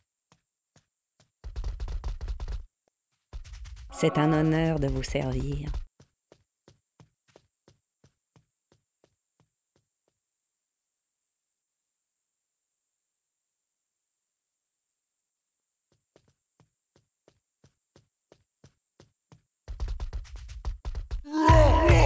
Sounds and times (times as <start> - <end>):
Speech: 3.9 - 5.8, 21.3 - 22.0.